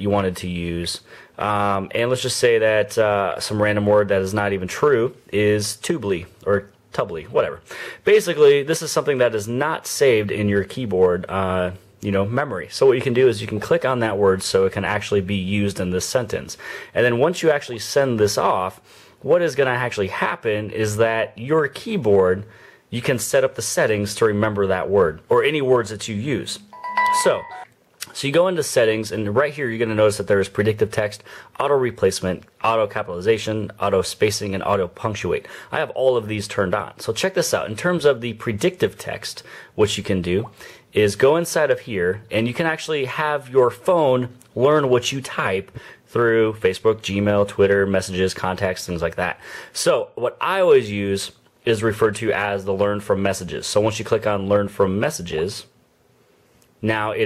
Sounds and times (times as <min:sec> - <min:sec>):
Speech: 0:00.0 - 0:55.8, 0:56.8 - 0:57.2
Inside, small room: 0:00.0 - 0:57.2.